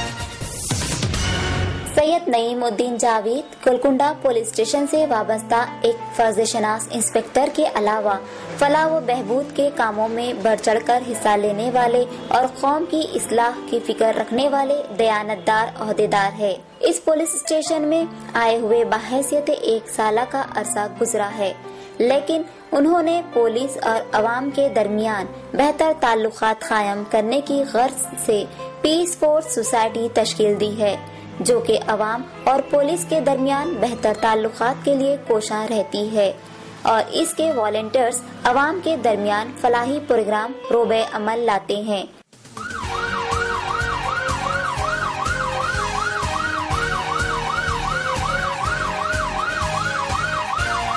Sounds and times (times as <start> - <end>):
Police car (siren): 42.6 - 50.9.